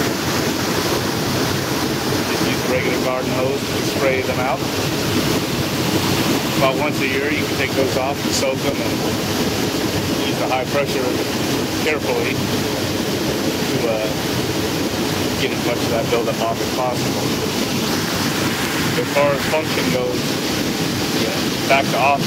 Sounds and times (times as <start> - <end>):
Speech: 2.3 - 4.6, 6.6 - 9.0, 10.2 - 11.2, 11.8 - 12.4, 13.7 - 14.2, 15.4 - 17.2, 19.0 - 20.2, 21.2 - 22.2.